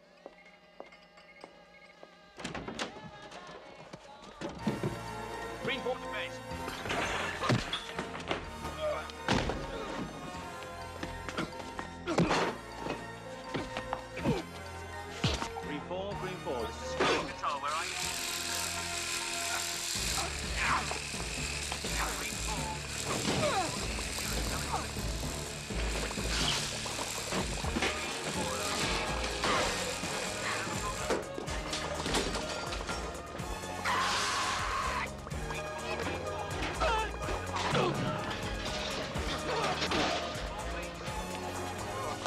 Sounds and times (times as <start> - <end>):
Music: 0.0 - 42.2
Speech: 15.6 - 17.9, 20.2 - 21.0, 21.9 - 22.8, 24.2 - 24.9.